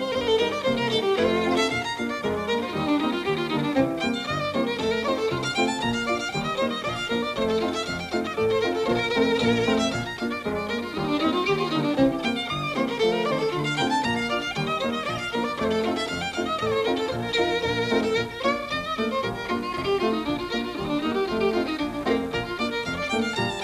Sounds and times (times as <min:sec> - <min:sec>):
Violin, fiddle: 0:00.0 - 0:23.6.